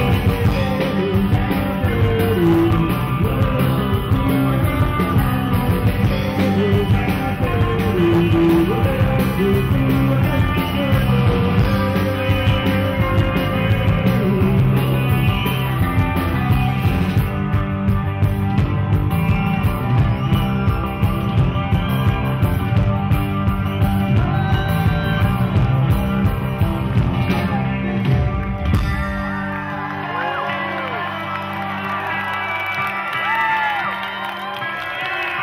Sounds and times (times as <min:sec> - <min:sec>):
Psychedelic rock: 0:00.0 - 0:34.6.